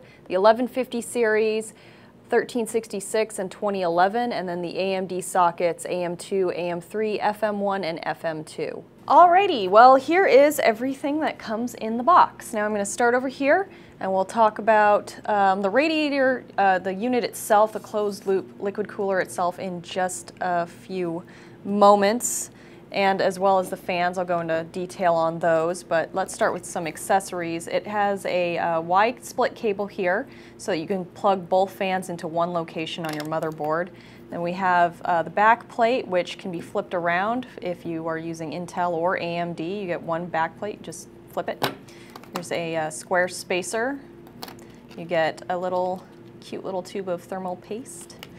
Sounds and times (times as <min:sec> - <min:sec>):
Speech: 0:00.3 - 0:41.7, 0:42.4 - 0:44.1, 0:45.0 - 0:48.2.